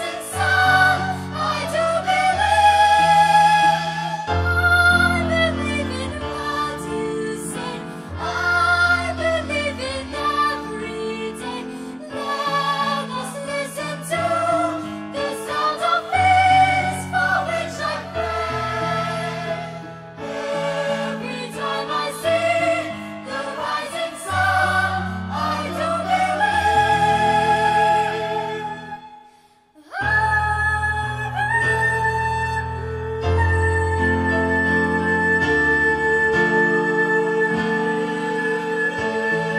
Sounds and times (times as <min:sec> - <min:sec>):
Choir: 0:00.0 - 0:29.3, 0:33.4 - 0:39.5.